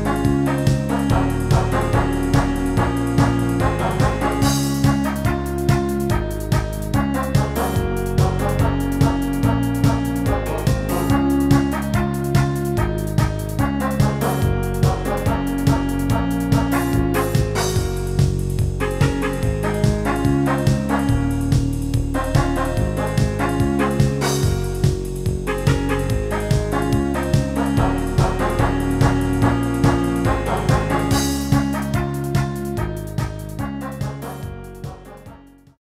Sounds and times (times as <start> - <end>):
Music: 0.0 - 35.8.